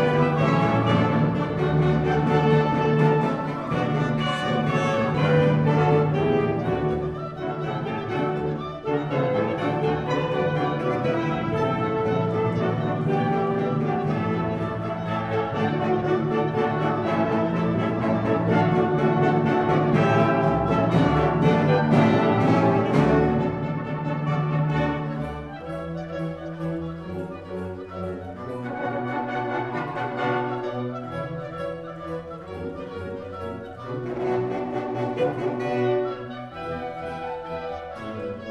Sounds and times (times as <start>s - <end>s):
Inside, large room or hall: 0.0s - 38.5s
Orchestra: 0.0s - 38.5s.